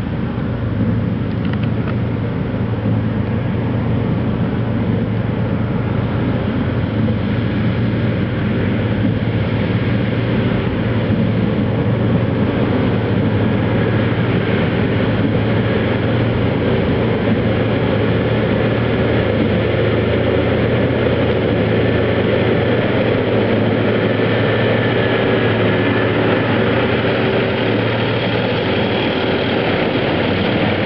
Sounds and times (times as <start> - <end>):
Outside, rural or natural: 0.0 - 30.8
Vehicle: 0.0 - 30.8.